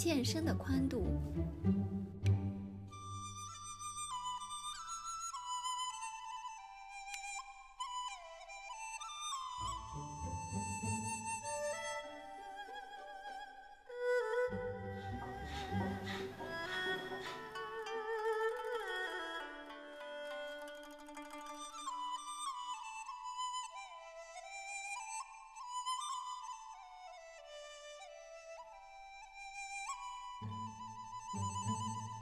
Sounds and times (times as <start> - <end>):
Music: 0.0 - 32.2.